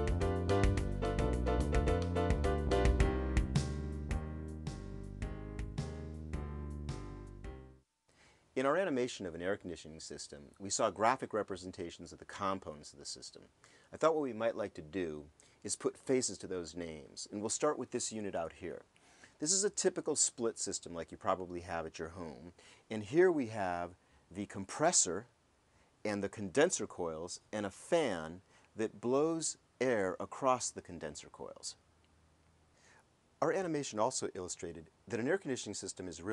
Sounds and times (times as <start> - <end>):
Speech: 8.6 - 25.4, 26.0 - 31.8, 33.4 - 36.3.